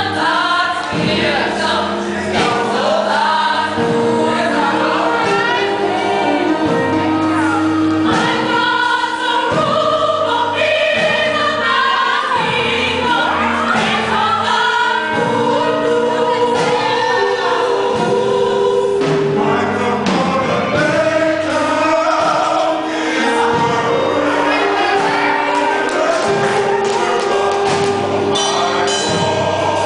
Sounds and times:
Choir: 0.0s - 29.8s.

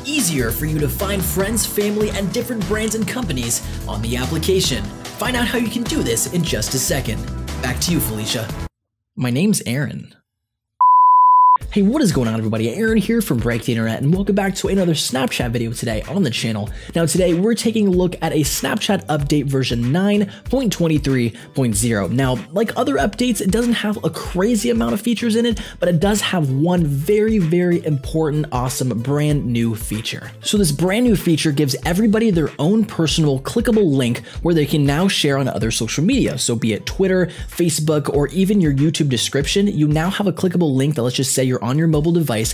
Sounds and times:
Beep, bleep: 10.8s - 11.6s.

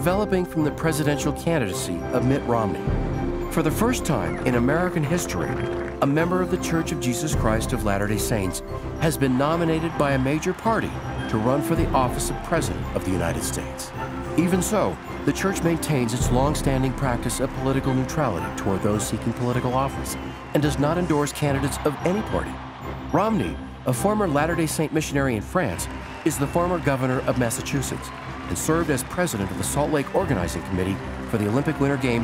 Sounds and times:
Speech: 0.0s - 2.9s, 3.5s - 32.2s
Music: 0.0s - 32.2s.

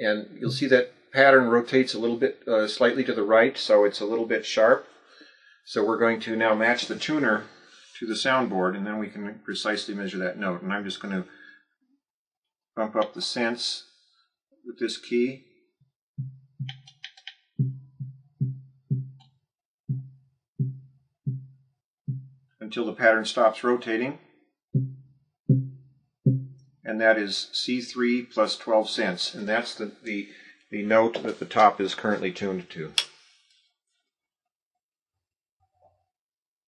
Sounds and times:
Speech: 0.0s - 4.9s, 5.7s - 11.5s, 12.8s - 13.8s, 14.7s - 15.4s, 22.6s - 24.2s, 26.9s - 33.0s.

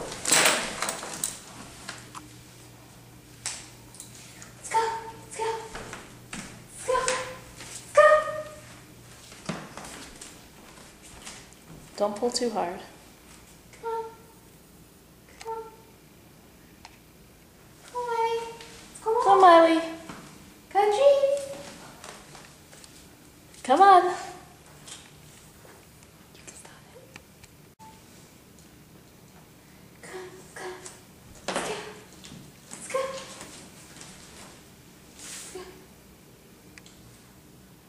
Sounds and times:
Speech: 4.6s - 5.8s, 6.8s - 8.6s, 12.0s - 13.0s, 13.7s - 14.4s, 15.3s - 15.9s, 17.8s - 20.1s, 20.7s - 22.1s, 23.6s - 24.5s, 30.0s - 31.0s, 32.8s - 33.5s.

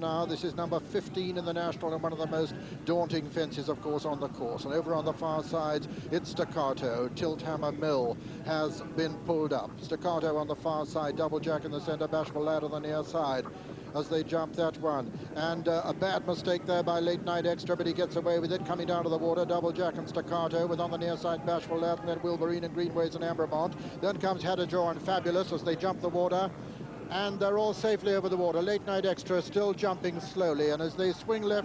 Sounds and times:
Speech: 0.0s - 31.6s.

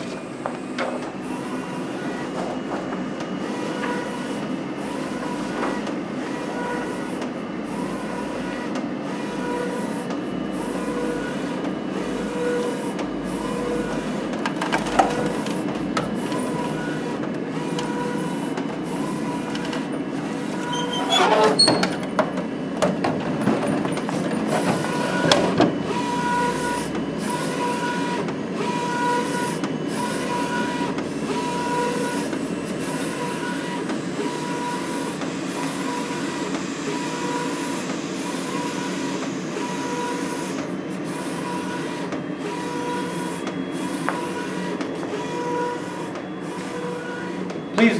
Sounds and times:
Printer: 0.0s - 48.0s.

